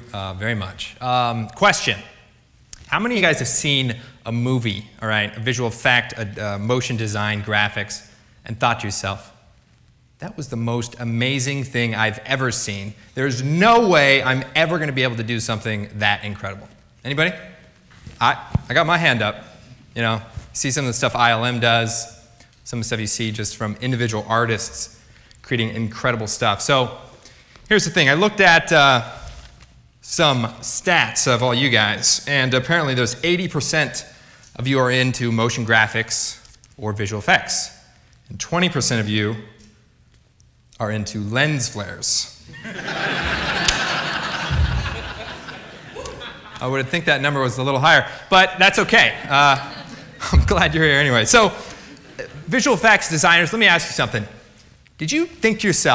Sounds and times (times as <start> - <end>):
Male speech, man speaking: 0.0 - 2.2, 2.9 - 9.4, 10.2 - 17.5, 18.2 - 19.4, 20.0 - 27.0, 27.7 - 29.2, 30.1 - 39.6, 40.8 - 42.4, 46.6 - 54.4, 55.0 - 55.9
Narration, monologue: 0.0 - 55.9.